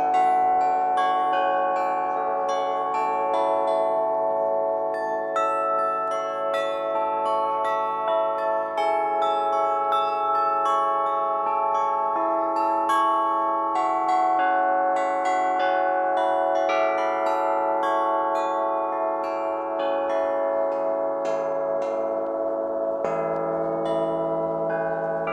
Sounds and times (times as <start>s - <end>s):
Bell: 0.0s - 25.3s.